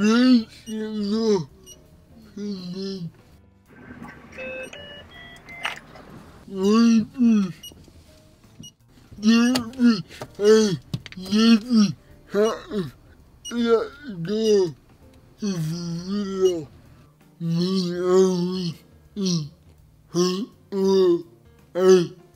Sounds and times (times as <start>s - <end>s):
Speech: 0.0s - 1.5s, 2.3s - 3.1s, 6.5s - 7.6s, 13.5s - 14.8s, 17.4s - 19.5s, 20.2s - 22.2s
Car: 3.2s - 16.9s.